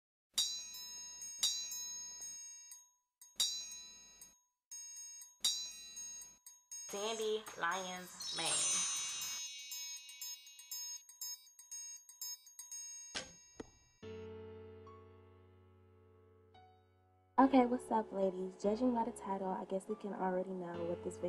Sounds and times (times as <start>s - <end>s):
Music: 0.4s - 21.2s
Speech: 6.9s - 8.8s, 17.4s - 21.2s.